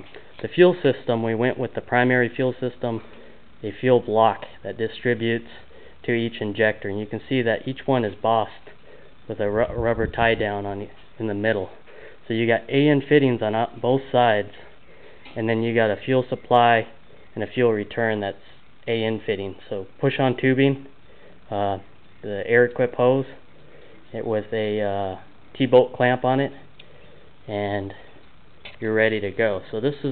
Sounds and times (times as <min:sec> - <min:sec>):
Speech: 0:00.0 - 0:14.8, 0:15.4 - 0:20.9, 0:21.5 - 0:23.4, 0:24.1 - 0:26.7, 0:27.5 - 0:28.1, 0:28.7 - 0:30.1.